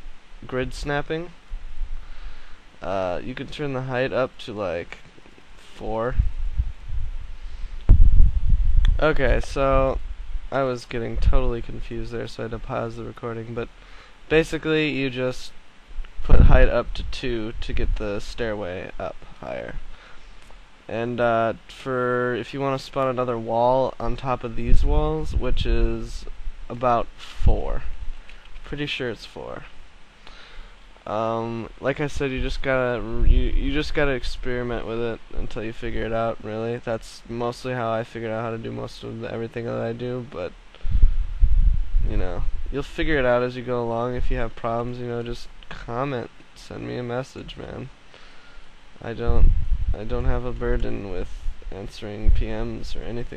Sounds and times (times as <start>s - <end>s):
Speech: 0.4s - 1.4s, 2.8s - 6.2s, 8.9s - 13.7s, 14.3s - 15.6s, 16.2s - 19.8s, 20.9s - 27.9s, 28.6s - 29.7s, 31.0s - 40.6s, 42.0s - 48.0s, 49.0s - 53.3s.